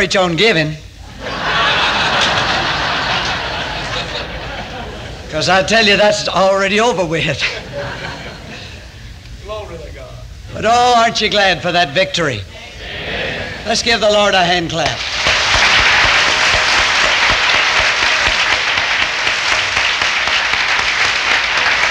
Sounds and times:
Speech: 0.0 - 0.8, 5.3 - 7.6, 9.4 - 12.8, 13.6 - 15.0.

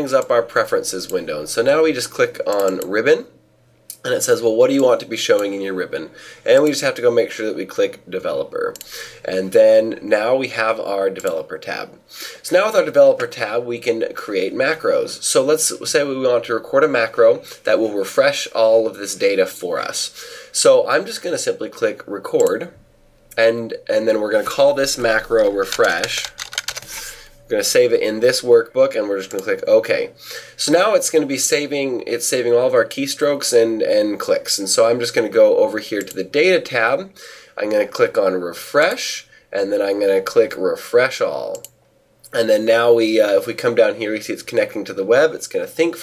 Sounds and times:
Speech: 0.0 - 22.8, 23.4 - 26.3, 27.5 - 41.7, 42.3 - 46.0.

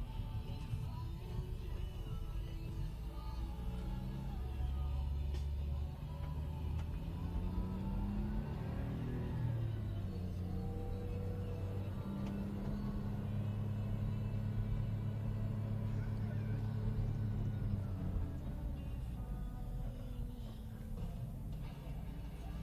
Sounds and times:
Music: 0.0 - 22.6.

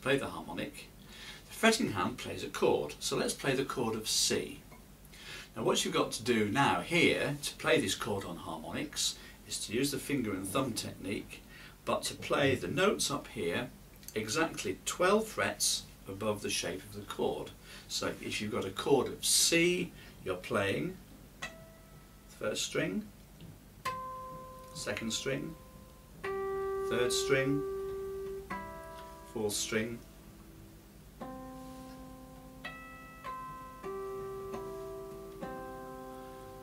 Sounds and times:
Speech: 0.0 - 0.9, 1.5 - 4.7, 5.6 - 21.0, 22.4 - 23.1, 24.8 - 25.6, 26.9 - 27.7, 29.4 - 30.0.

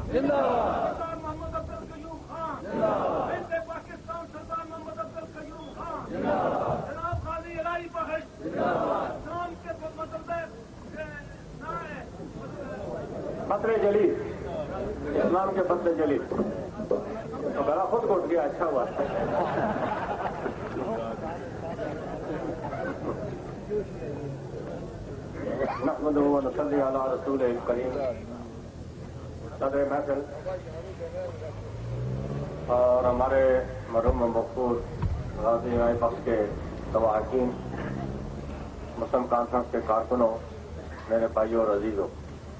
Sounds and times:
Narration, monologue: 0.0 - 22.0, 23.4 - 42.5
Male speech, man speaking: 0.1 - 19.2, 20.8 - 22.0, 22.7 - 24.8, 25.4 - 28.6, 29.4 - 31.7, 32.7 - 38.1, 38.9 - 42.2.

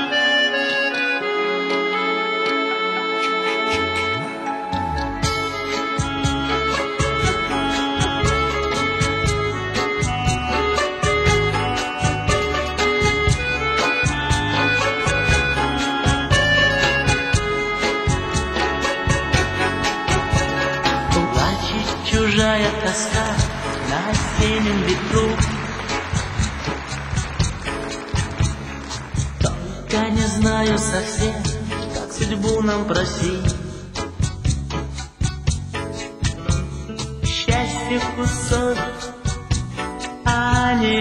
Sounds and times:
Music: 0.0 - 41.0.

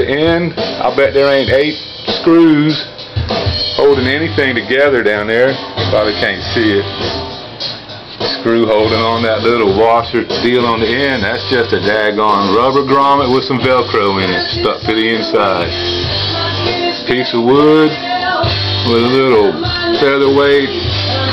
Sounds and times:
Speech: 0.0 - 2.9, 3.8 - 6.9, 8.4 - 15.7, 17.1 - 18.0, 18.8 - 20.7
Music: 0.0 - 21.3.

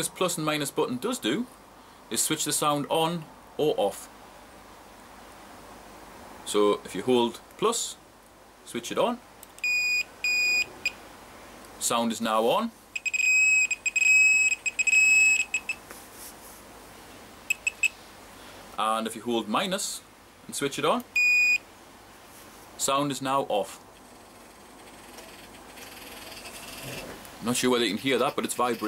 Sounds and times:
Speech: 0.0 - 1.5, 2.1 - 4.1, 6.5 - 8.0, 8.7 - 9.2, 11.8 - 12.8, 18.8 - 21.1, 22.8 - 23.8, 27.4 - 28.8.

